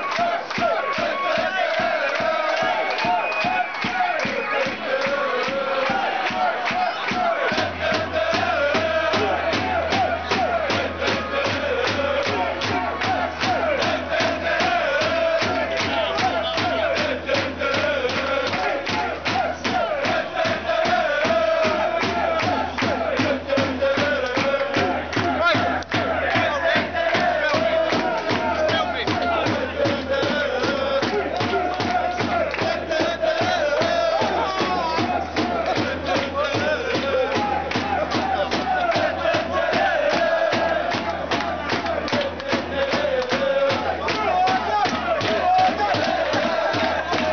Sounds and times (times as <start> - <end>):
Music: 0.0 - 47.3
Male singing: 0.1 - 47.3.